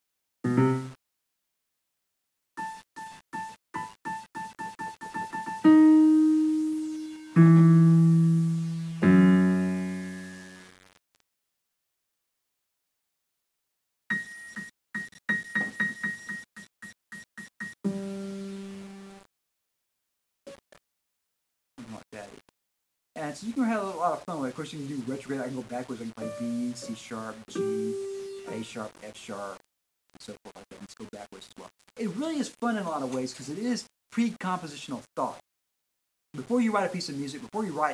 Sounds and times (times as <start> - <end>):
Music: 0.5 - 1.0, 2.6 - 11.0, 17.9 - 19.3, 25.3 - 28.9.